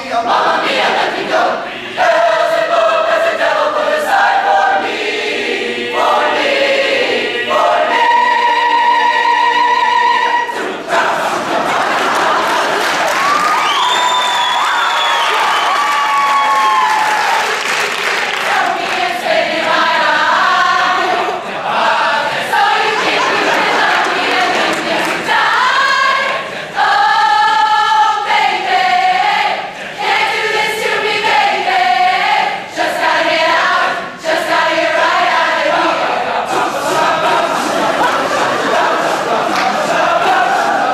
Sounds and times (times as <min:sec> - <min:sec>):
Choir: 0:00.0 - 0:40.9
Inside, large room or hall: 0:00.0 - 0:40.9.